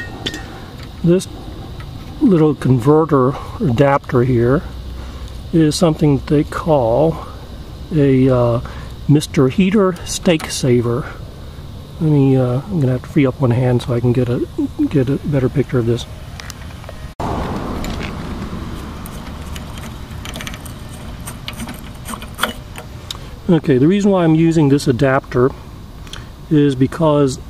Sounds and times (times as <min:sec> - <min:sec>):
Ratchet, pawl: 0:19.0 - 0:22.8
Gears: 0:19.1 - 0:22.8.